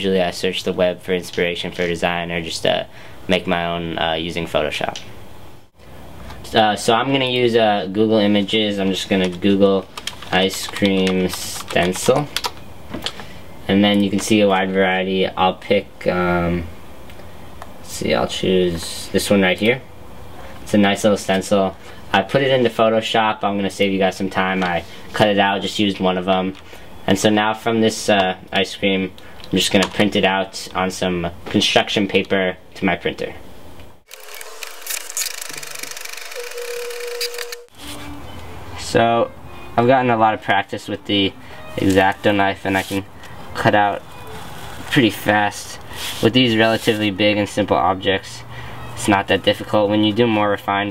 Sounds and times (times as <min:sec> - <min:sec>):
Speech: 0:00.0 - 0:05.1, 0:06.4 - 0:12.4, 0:13.7 - 0:16.7, 0:17.8 - 0:19.9, 0:20.6 - 0:33.4, 0:38.8 - 0:44.0, 0:44.9 - 0:50.9.